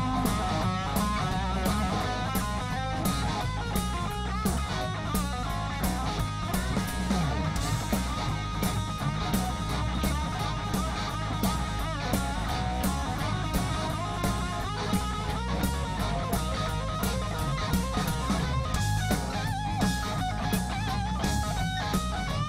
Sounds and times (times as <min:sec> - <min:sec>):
Music: 0:00.0 - 0:22.4.